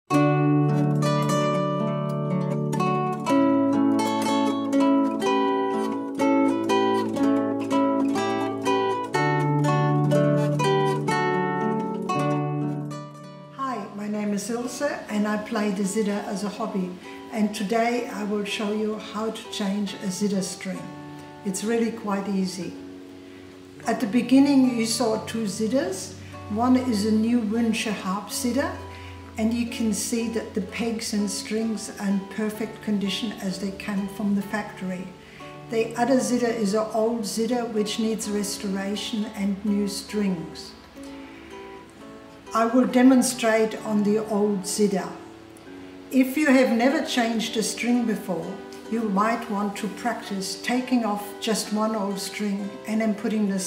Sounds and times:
Music: 0.0s - 53.6s
Speech: 13.6s - 22.8s, 23.8s - 28.8s, 29.4s - 35.1s, 35.7s - 40.8s, 42.5s - 45.2s, 46.1s - 53.6s.

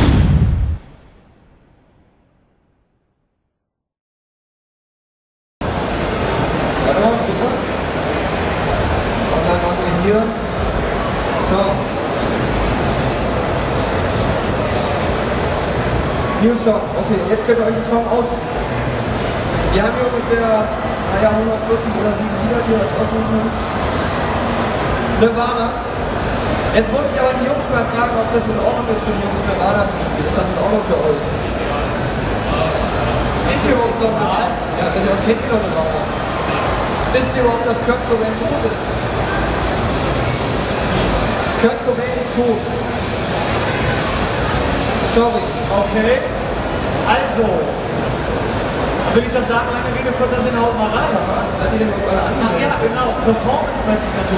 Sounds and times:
Speech: 6.8s - 7.7s, 19.6s - 23.6s, 25.2s - 25.8s, 26.7s - 39.0s, 40.8s - 42.8s, 45.0s - 46.4s, 47.0s - 47.8s, 49.0s - 54.3s.

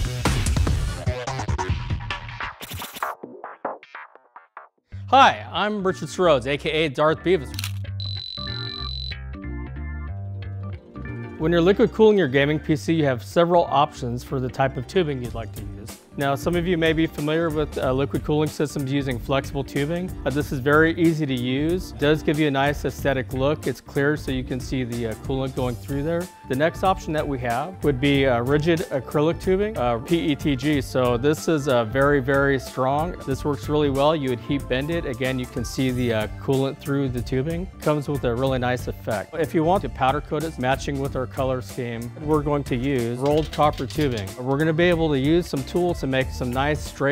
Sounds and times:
Music: 0.0s - 47.1s
Speech: 5.1s - 7.6s, 11.4s - 47.1s.

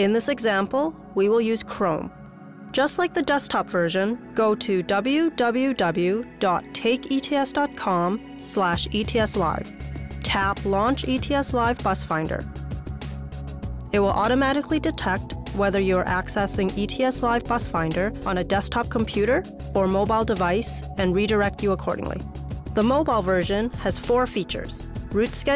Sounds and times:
Speech: 0.0s - 2.1s, 2.8s - 12.4s, 13.9s - 22.2s, 22.8s - 25.5s
Music: 0.0s - 25.5s.

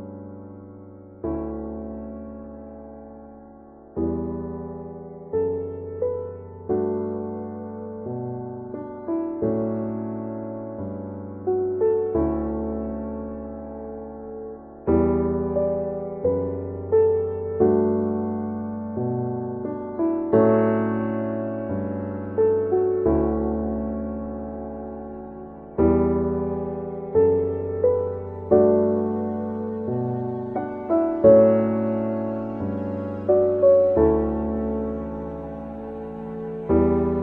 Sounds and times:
Music: 0.0s - 37.2s.

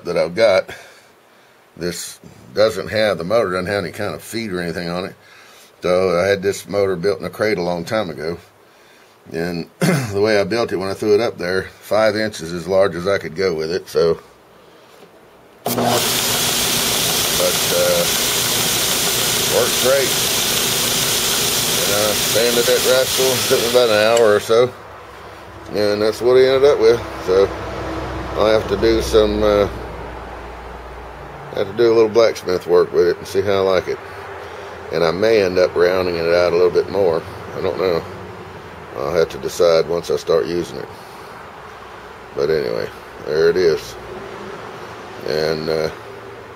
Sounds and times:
Speech: 0.0s - 0.9s, 1.8s - 5.2s, 5.8s - 8.5s, 9.3s - 14.3s, 17.4s - 18.2s, 19.5s - 20.2s, 21.8s - 24.8s, 25.7s - 27.5s, 28.4s - 29.8s, 31.5s - 34.0s, 34.9s - 38.2s, 39.0s - 41.0s, 42.4s - 44.0s, 45.2s - 46.0s.

